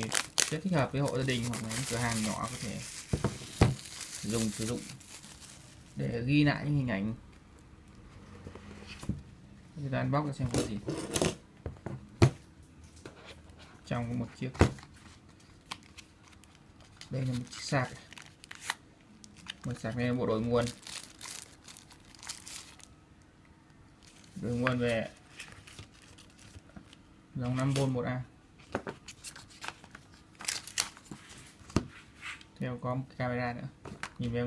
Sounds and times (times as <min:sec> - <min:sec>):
Speech: 0:00.0 - 0:02.9, 0:04.2 - 0:05.0, 0:06.0 - 0:07.2, 0:09.8 - 0:10.9, 0:13.9 - 0:14.7, 0:17.1 - 0:18.1, 0:19.6 - 0:20.8, 0:24.4 - 0:25.2, 0:27.4 - 0:28.3, 0:32.6 - 0:34.4.